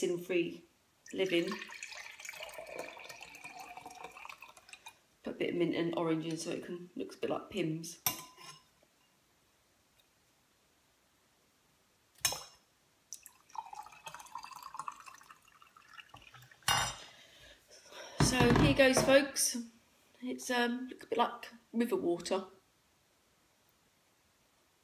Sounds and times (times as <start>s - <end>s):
Speech: 0.0s - 1.6s, 5.3s - 8.0s, 18.2s - 22.6s
Inside, small room: 0.0s - 24.8s.